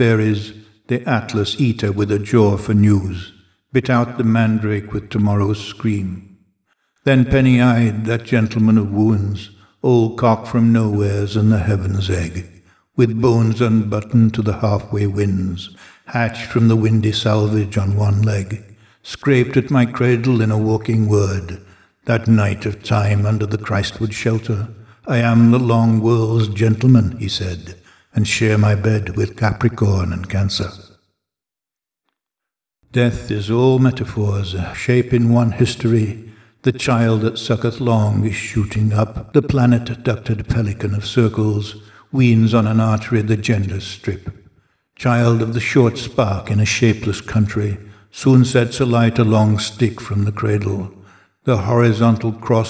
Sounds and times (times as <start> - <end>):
Speech: 0.0 - 6.3, 7.0 - 30.9, 32.9 - 44.4, 45.0 - 52.6.